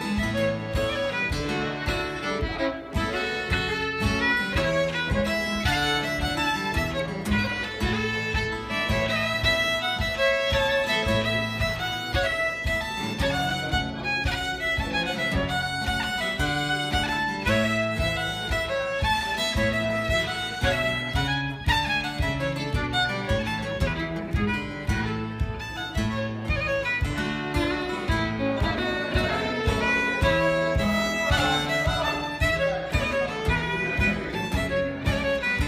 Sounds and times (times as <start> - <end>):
Violin, fiddle: 0.0 - 35.6.